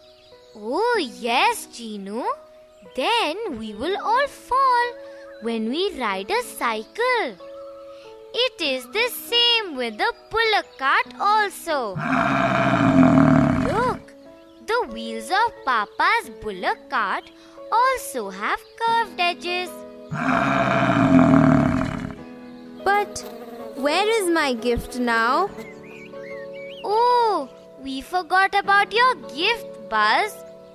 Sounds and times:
Music: 0.0 - 30.7
Child speech, kid speaking: 0.6 - 2.4, 3.0 - 7.4, 8.4 - 12.0, 14.7 - 19.8, 22.9 - 23.2, 23.8 - 25.5, 26.8 - 30.4.

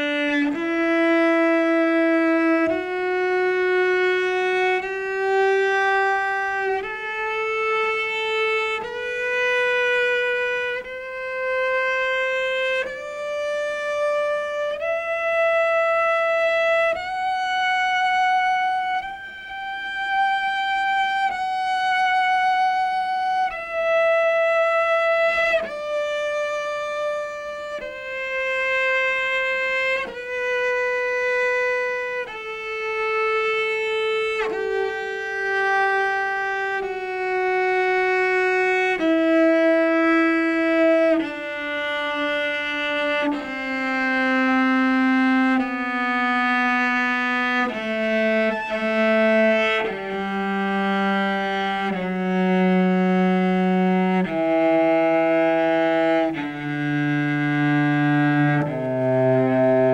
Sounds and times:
Cello: 0.0 - 59.9
Double bass: 0.0 - 59.9.

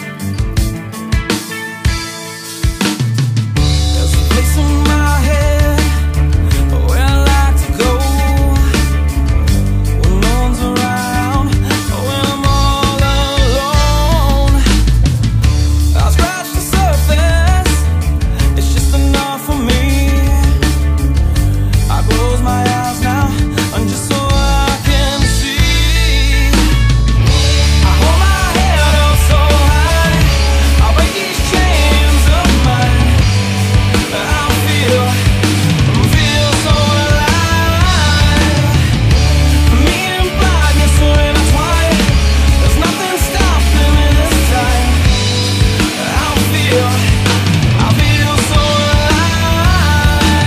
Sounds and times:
Music: 0.0 - 50.4.

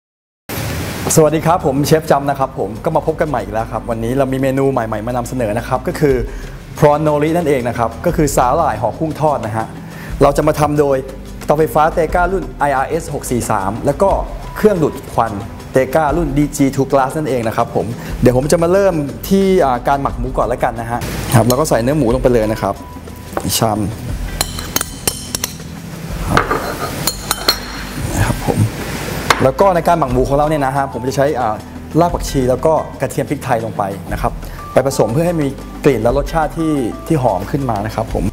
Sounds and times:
Music: 0.5 - 38.3
Speech: 1.1 - 22.8, 23.4 - 24.0, 29.4 - 38.3
Chink, clink: 24.4 - 25.6, 26.5 - 27.8.

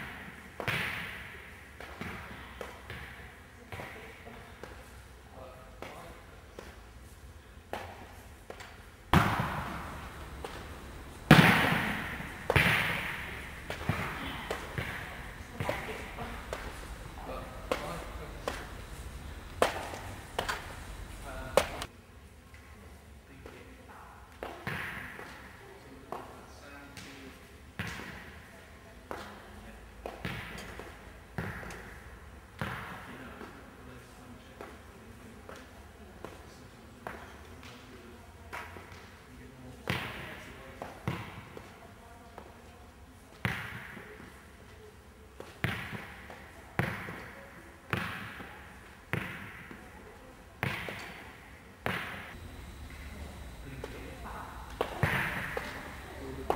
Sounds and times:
Inside, large room or hall: 0.0 - 56.5
Inside, public space: 0.0 - 56.5
Speech: 14.1 - 18.8, 21.2 - 21.9, 52.9 - 56.5.

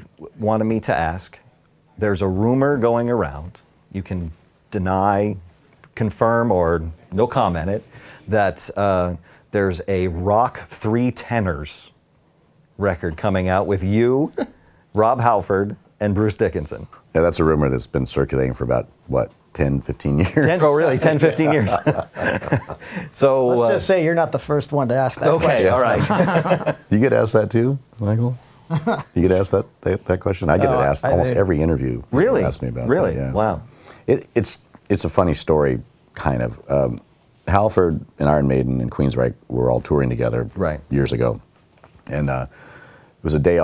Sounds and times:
Speech: 0.0 - 1.4, 2.0 - 12.0, 12.8 - 22.0, 23.2 - 26.2, 26.9 - 28.4, 29.2 - 41.5, 42.1 - 42.5, 43.2 - 43.6.

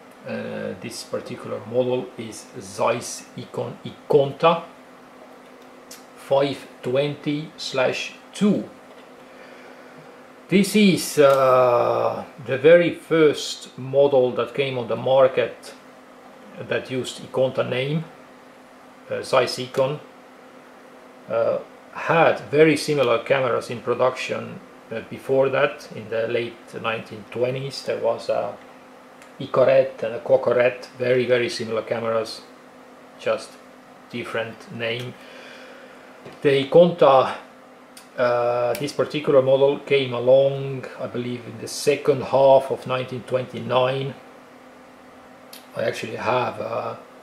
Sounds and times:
Speech: 0.2 - 4.7, 5.9 - 8.8, 10.5 - 15.8, 16.5 - 18.2, 19.1 - 20.1, 21.3 - 28.6, 29.4 - 32.5, 33.2 - 35.2, 36.4 - 44.2, 45.6 - 47.0.

